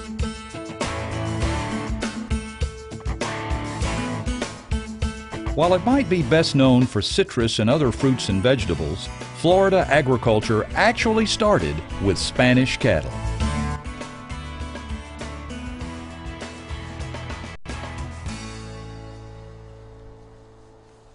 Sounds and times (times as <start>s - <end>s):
Music: 0.0s - 21.1s
Speech: 5.6s - 13.2s.